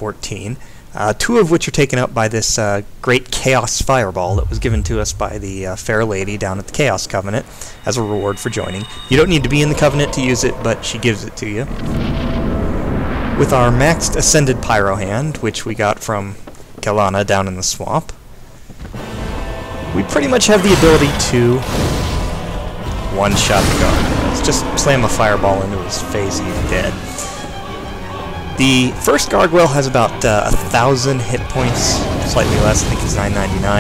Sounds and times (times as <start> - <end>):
Speech: 0.0 - 11.8, 13.4 - 18.2, 19.9 - 21.7, 23.1 - 27.1, 28.6 - 33.8
Music: 4.3 - 15.6, 18.9 - 33.8.